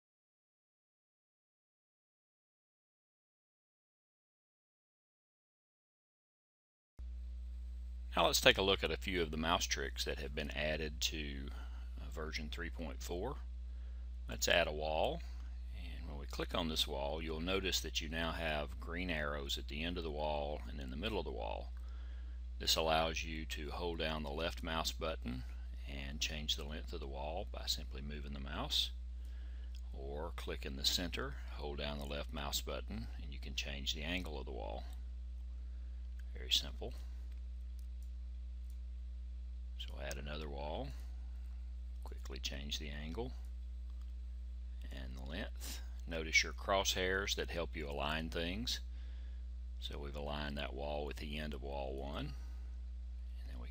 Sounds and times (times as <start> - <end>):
Speech: 8.2 - 13.5, 14.3 - 21.8, 22.6 - 29.0, 29.9 - 35.0, 36.3 - 37.2, 39.8 - 41.1, 42.1 - 43.4, 44.8 - 48.9, 49.8 - 52.5, 53.4 - 53.7.